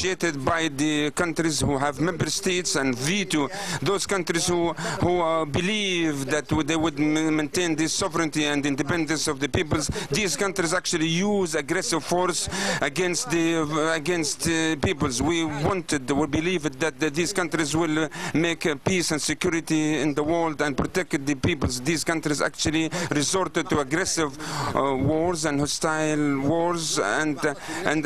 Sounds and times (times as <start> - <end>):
Male speech, man speaking: 0.0 - 28.0
Narration, monologue: 0.0 - 28.0.